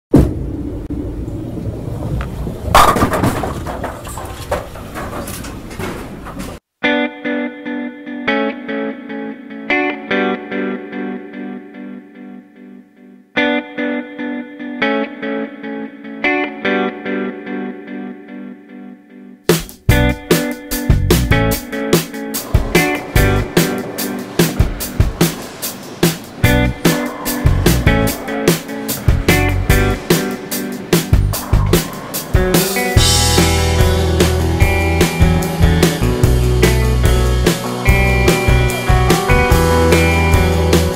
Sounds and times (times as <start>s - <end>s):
Music: 6.8s - 40.9s.